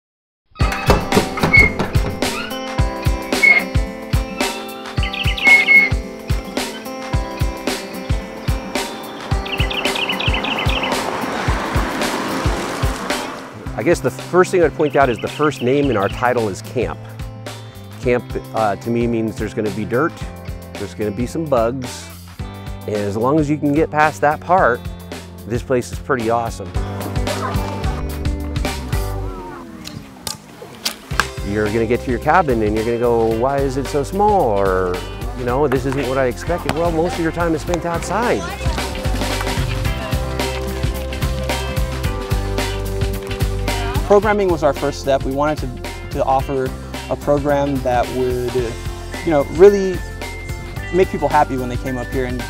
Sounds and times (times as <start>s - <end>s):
Outside, rural or natural: 0.4s - 52.4s
Music: 0.5s - 29.9s, 31.1s - 52.4s.